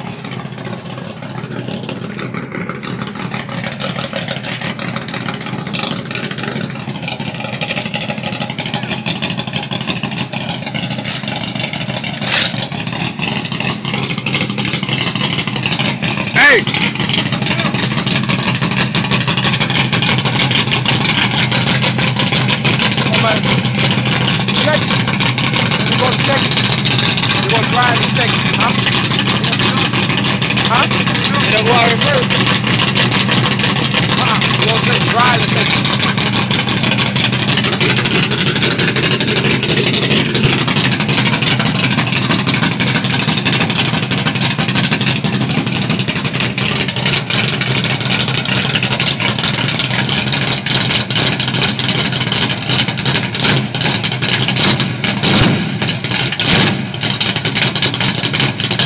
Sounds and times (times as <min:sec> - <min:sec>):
Vehicle: 0:00.0 - 0:58.8
Speech: 0:16.4 - 0:16.7, 0:17.5 - 0:17.8, 0:23.1 - 0:23.4, 0:24.6 - 0:24.9, 0:25.9 - 0:26.5, 0:27.4 - 0:28.8, 0:29.4 - 0:29.9, 0:30.6 - 0:32.4, 0:34.2 - 0:35.8.